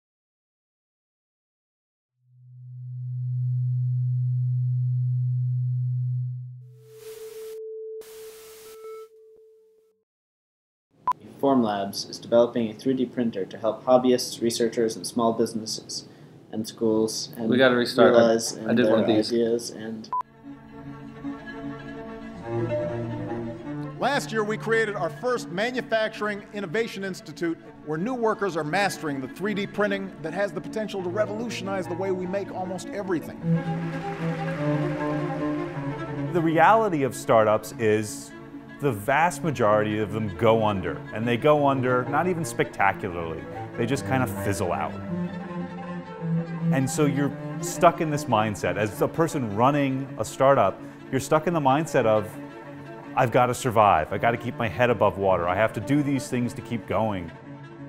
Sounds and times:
Music: 2.2 - 10.0, 20.1 - 57.8
Speech: 11.2 - 20.1, 24.0 - 33.4, 36.4 - 45.0, 46.7 - 52.4, 53.2 - 57.4.

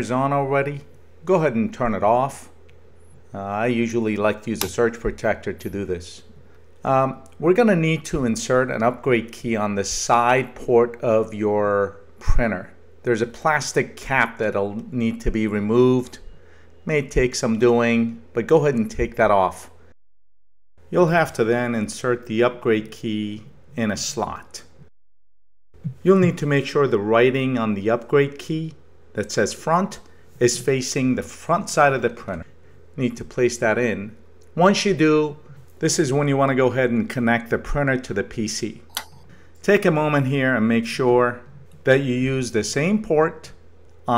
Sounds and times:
Speech: 0.0 - 2.6, 3.3 - 19.8, 20.9 - 24.8, 25.8 - 44.1.

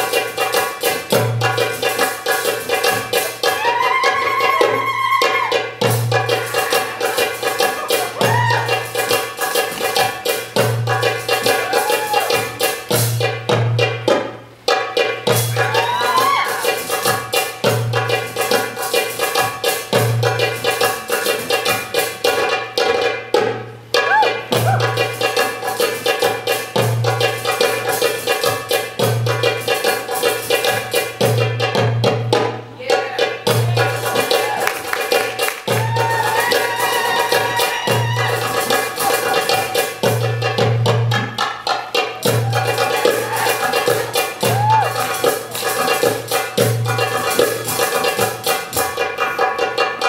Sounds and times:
Maraca: 0.0 - 50.0.

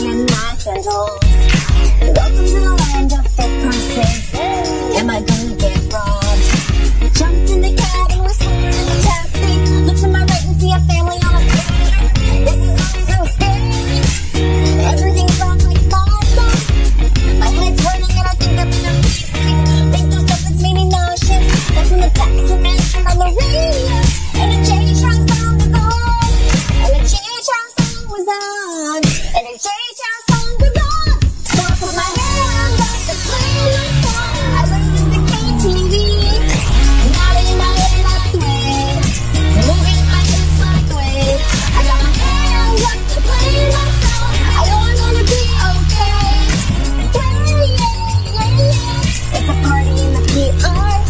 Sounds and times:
Music: 0.0 - 51.1.

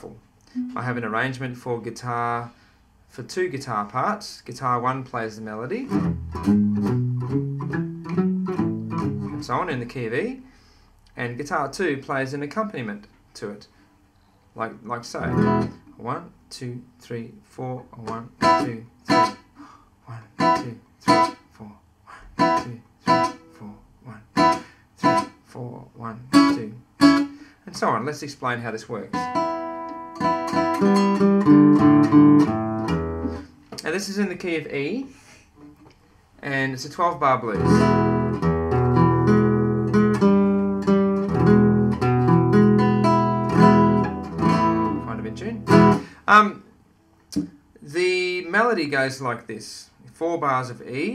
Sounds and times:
Speech: 0.0 - 6.0, 9.3 - 10.5, 11.1 - 13.7, 14.6 - 18.9, 20.1 - 20.8, 21.5 - 22.9, 23.5 - 24.4, 25.5 - 26.9, 27.7 - 29.3, 33.8 - 35.2, 36.4 - 37.8, 44.9 - 45.7, 46.3 - 46.7, 47.8 - 51.1
Acoustic guitar: 0.5 - 1.3, 5.8 - 9.8, 15.2 - 16.0, 18.0 - 21.5, 22.2 - 25.5, 26.2 - 27.9, 29.0 - 34.0, 37.5 - 46.2.

